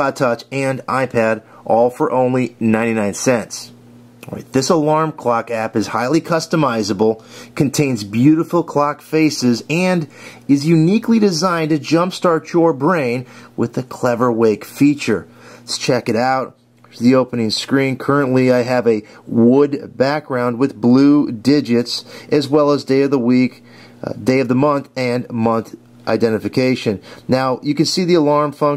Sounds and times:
Speech: 0.0 - 28.7.

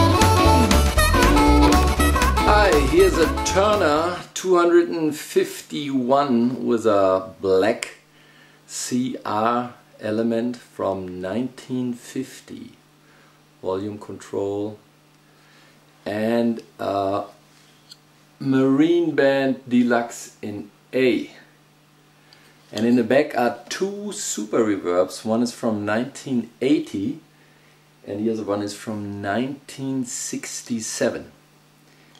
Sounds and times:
Speech: 2.4 - 8.0, 8.7 - 12.8, 13.6 - 14.8, 16.0 - 17.4, 18.4 - 21.5, 22.7 - 27.2, 28.0 - 31.4.

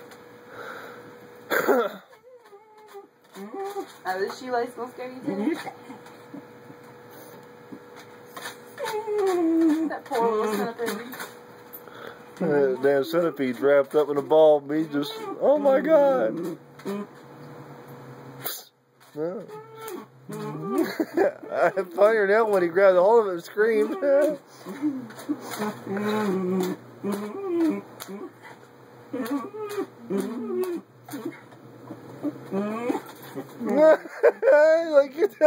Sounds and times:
Whimper (dog): 2.1 - 4.0, 8.7 - 10.7, 14.8 - 17.1, 19.2 - 22.1, 23.6 - 28.5, 29.1 - 34.1.

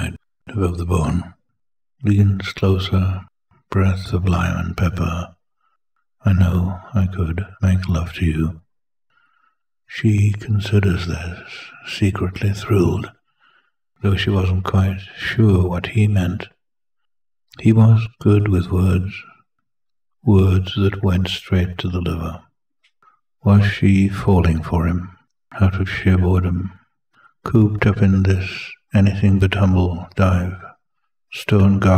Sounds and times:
Speech: 0.0 - 1.4, 2.0 - 5.4, 6.2 - 8.7, 9.9 - 13.2, 14.0 - 16.6, 17.5 - 19.4, 20.2 - 22.5, 23.4 - 26.8, 27.4 - 31.9.

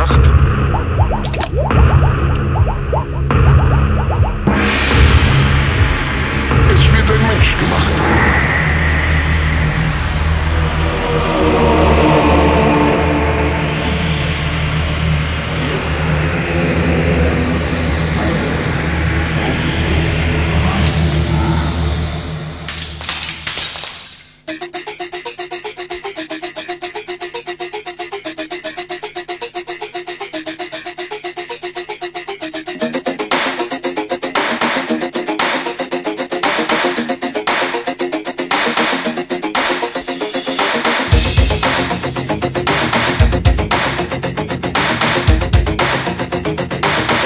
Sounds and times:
Music: 0.0 - 22.7, 24.4 - 47.2.

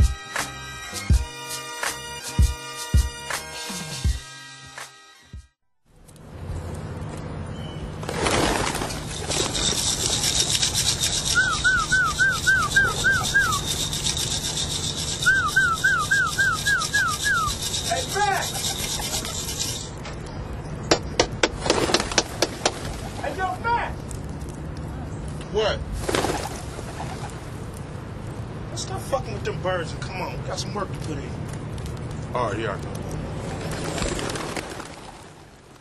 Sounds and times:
Speech: 17.9 - 18.6, 23.2 - 24.0, 28.7 - 31.4, 32.3 - 32.8.

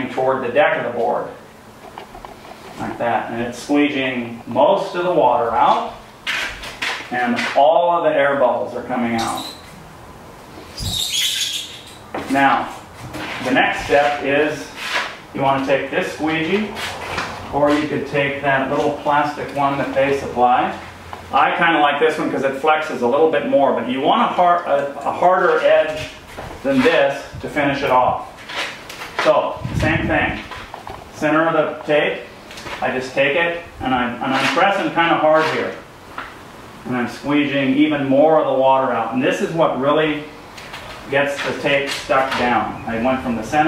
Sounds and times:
Speech: 0.0 - 1.4, 2.8 - 6.0, 7.1 - 9.6, 12.2 - 12.8, 13.4 - 16.8, 17.5 - 28.3, 29.2 - 30.5, 31.2 - 35.9, 36.8 - 40.4, 41.1 - 43.6.

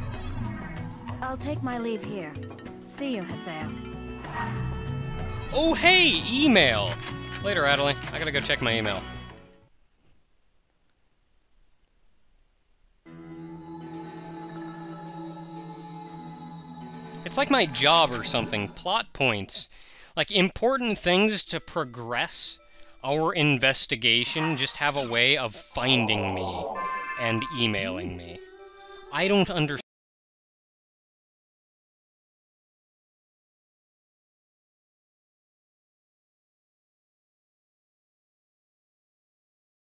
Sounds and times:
Speech: 5.6 - 9.0, 17.3 - 28.4, 29.1 - 29.8.

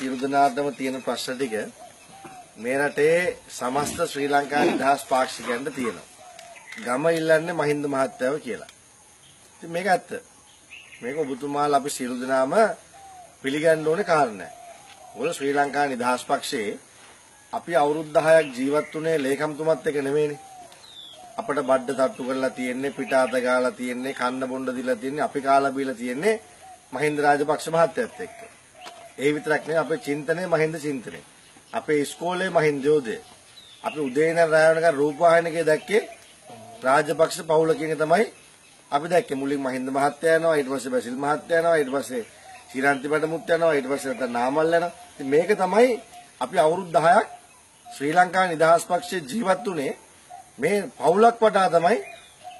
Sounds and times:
Male speech, man speaking: 0.0 - 1.7, 2.6 - 6.0, 6.8 - 8.7, 9.6 - 10.2, 11.0 - 12.8, 13.5 - 14.5, 15.2 - 16.8, 17.6 - 20.4, 21.4 - 26.4, 27.0 - 28.4, 29.2 - 31.2, 31.8 - 33.2, 33.8 - 38.3, 38.9 - 47.3, 48.0 - 50.0, 50.6 - 52.1.

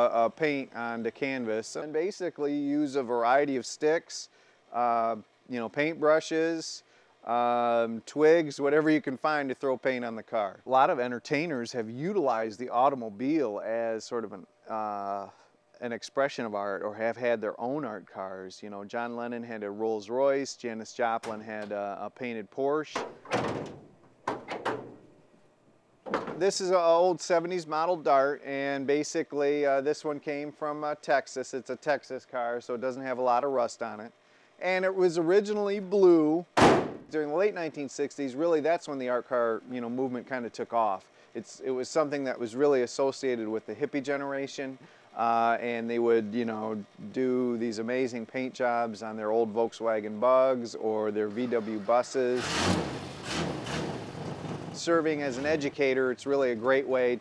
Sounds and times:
Speech: 0.0 - 23.0, 26.4 - 36.5, 37.1 - 52.4, 54.8 - 57.2.

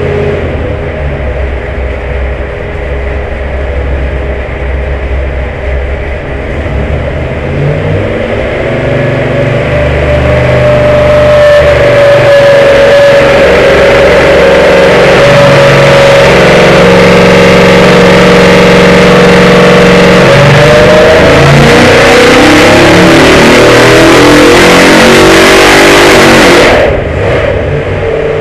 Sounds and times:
Vehicle: 0.0 - 28.4
Accelerating, revving, vroom: 7.6 - 27.7.

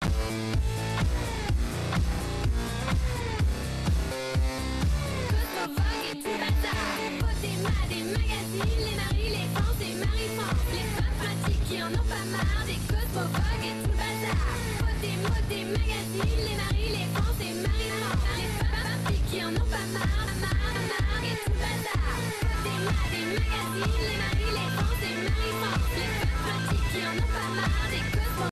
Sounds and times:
Music: 0.0 - 28.5.

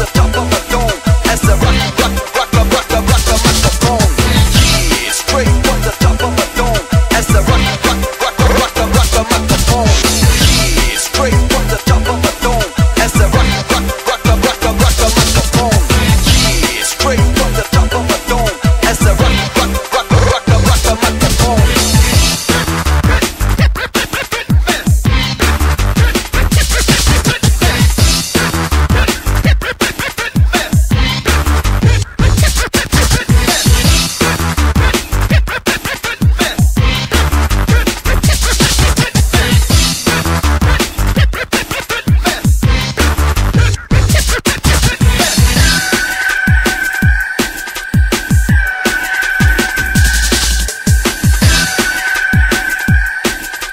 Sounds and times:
Drum and bass: 0.0 - 53.7.

